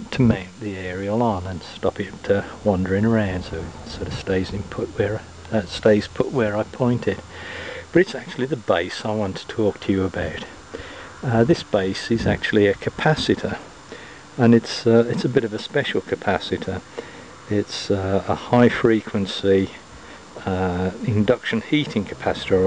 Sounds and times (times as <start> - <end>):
Speech: 0.0 - 7.3, 7.9 - 10.6, 11.2 - 13.7, 14.4 - 16.9, 17.5 - 19.8, 20.4 - 22.6.